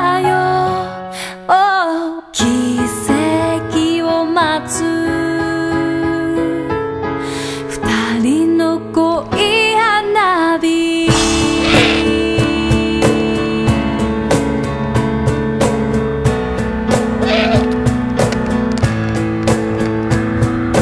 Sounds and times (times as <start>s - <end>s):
Owl: 11.6s - 12.2s, 17.2s - 17.8s.